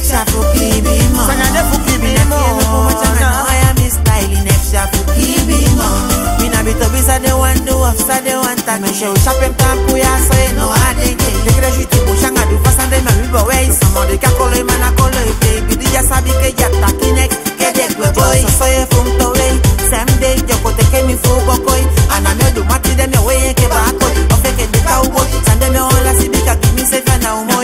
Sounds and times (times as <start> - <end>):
Music: 0.0 - 27.6.